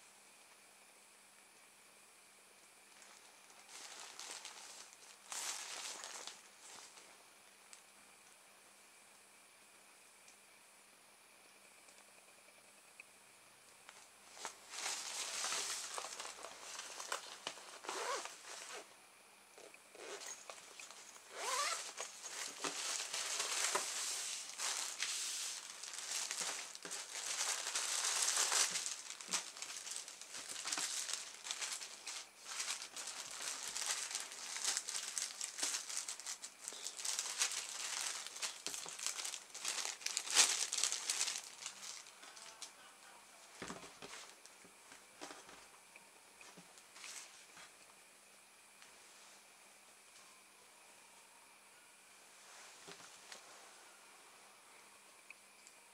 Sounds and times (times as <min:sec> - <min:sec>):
Crumpling, crinkling: 0:02.9 - 0:07.8, 0:13.9 - 0:18.9, 0:19.6 - 0:42.8, 0:43.5 - 0:44.5, 0:46.5 - 0:47.7.